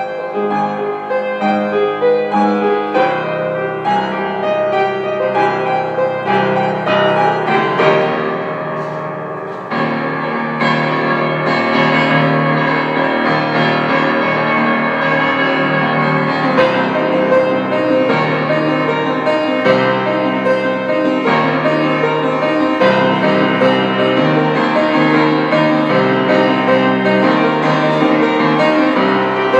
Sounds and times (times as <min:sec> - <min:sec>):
Music: 0:00.0 - 0:29.6.